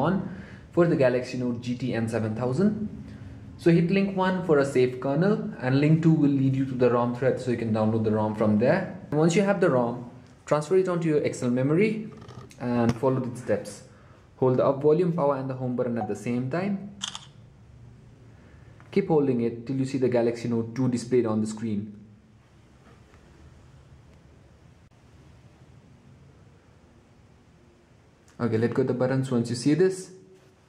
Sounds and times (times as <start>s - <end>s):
Speech: 0.0s - 2.9s, 3.6s - 16.9s, 18.9s - 22.1s, 28.3s - 30.2s.